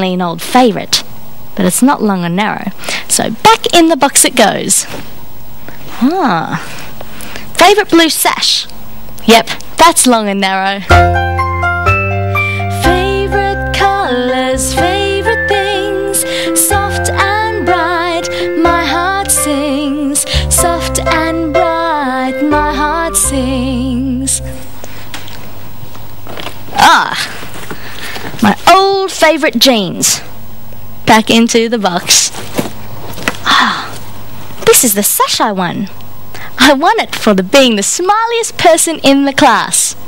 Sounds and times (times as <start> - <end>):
Music for children: 10.9 - 24.7.